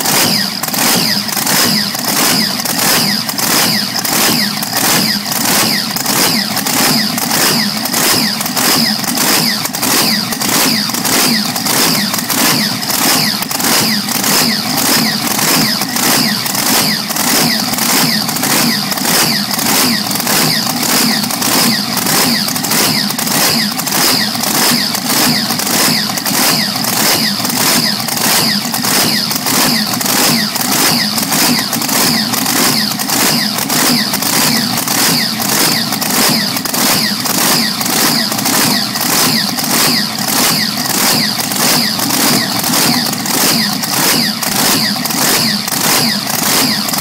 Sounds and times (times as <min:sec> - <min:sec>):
Idling: 0:00.0 - 0:47.0
Medium engine (mid frequency): 0:00.0 - 0:47.0.